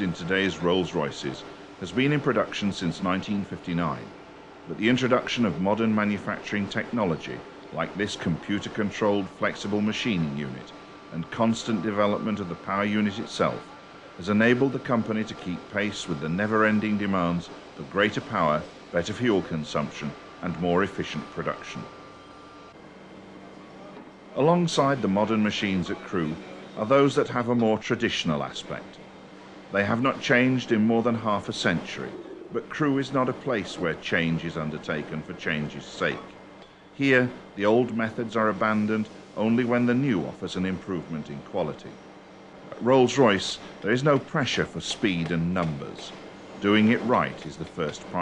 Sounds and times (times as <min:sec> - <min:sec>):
Speech: 0:00.0 - 0:04.1, 0:04.7 - 0:21.9, 0:23.8 - 0:29.0, 0:29.7 - 0:36.4, 0:37.0 - 0:42.0, 0:42.7 - 0:48.2.